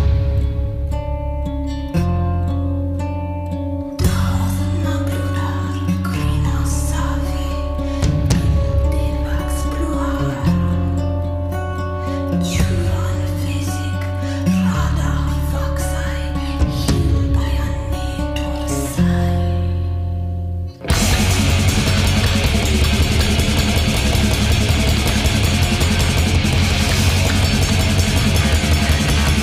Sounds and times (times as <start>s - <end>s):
Music: 0.0s - 29.4s.